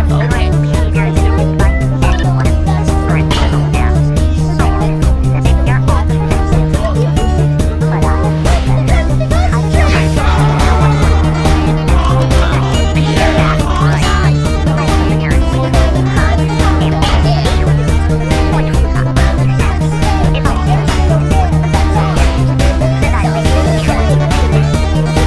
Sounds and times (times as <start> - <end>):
Funny music: 0.0 - 25.2.